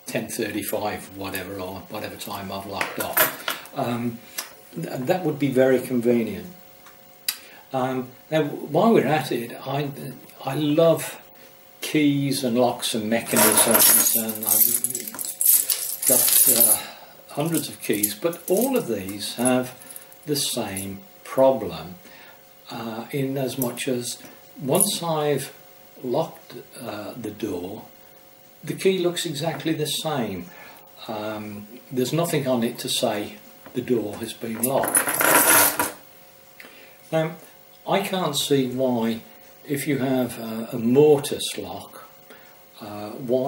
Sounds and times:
Speech: 0.1 - 6.6, 7.7 - 11.2, 11.8 - 15.2, 16.1 - 22.0, 22.7 - 27.9, 28.6 - 35.0, 37.1 - 42.1, 42.8 - 43.4
Keys jangling: 13.3 - 16.8.

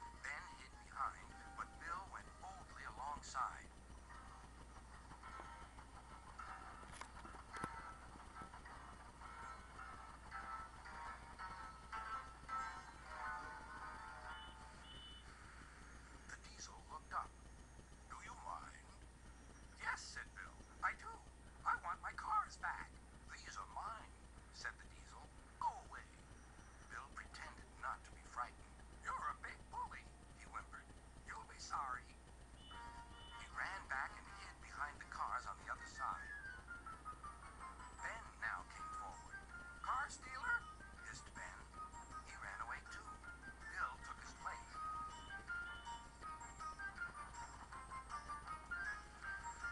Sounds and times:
Speech: 0.2 - 3.7, 16.3 - 17.3, 18.1 - 19.0, 19.8 - 26.2, 26.9 - 32.2, 33.4 - 36.4, 38.0 - 44.8.

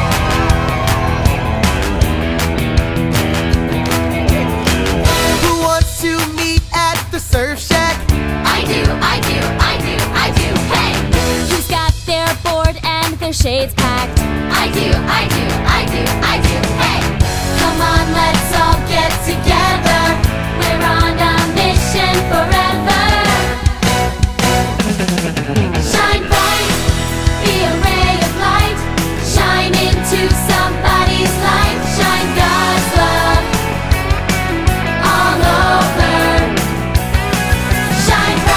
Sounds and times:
Exciting music: 0.0 - 38.5.

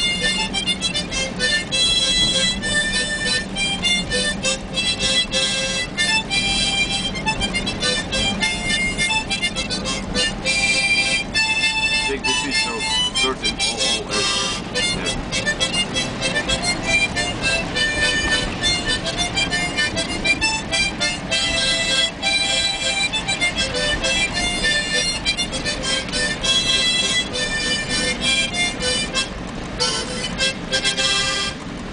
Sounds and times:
Car: 0.0 - 31.9
Music: 0.0 - 31.9.

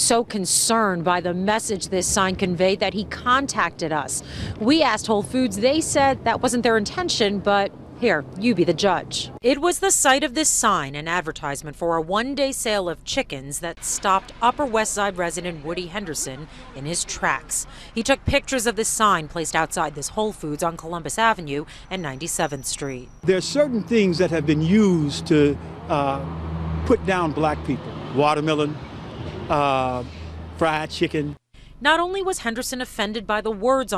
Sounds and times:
Speech: 0.0 - 26.3, 26.9 - 28.8, 29.5 - 33.9.

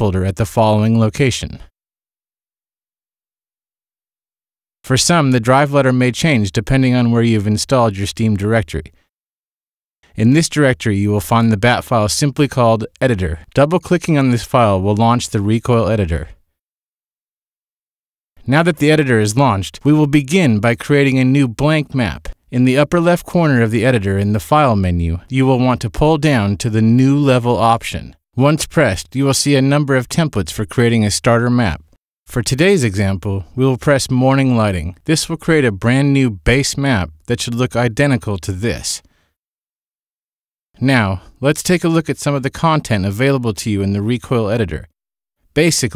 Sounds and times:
Speech: 0.0 - 1.7, 4.8 - 9.0, 10.1 - 16.4, 18.4 - 39.1, 40.8 - 44.9, 45.6 - 45.9.

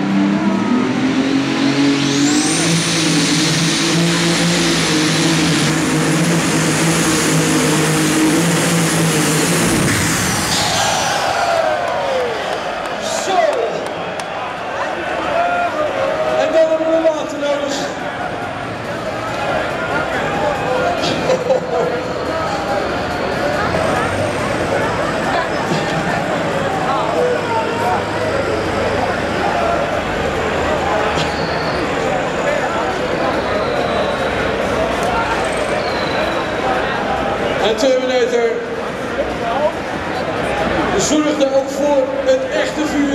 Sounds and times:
Heavy engine (low frequency): 0.0 - 43.1
Vehicle: 0.0 - 43.1
Speech: 13.0 - 14.0, 14.7 - 43.1.

